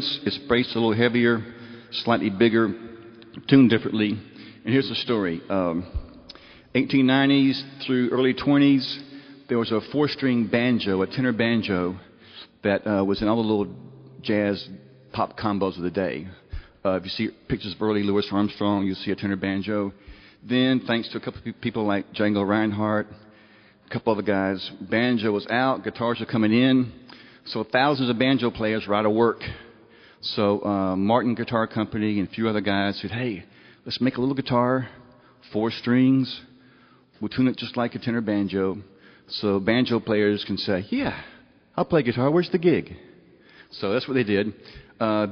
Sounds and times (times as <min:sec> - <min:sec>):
Speech: 0:00.0 - 0:06.1, 0:06.7 - 0:23.2, 0:23.9 - 0:36.5, 0:37.2 - 0:43.1, 0:43.7 - 0:45.3.